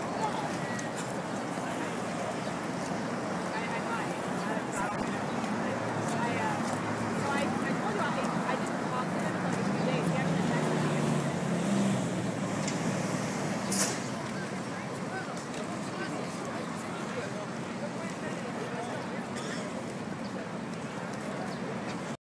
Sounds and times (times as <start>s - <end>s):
Speech: 0.0s - 11.6s, 14.0s - 22.2s.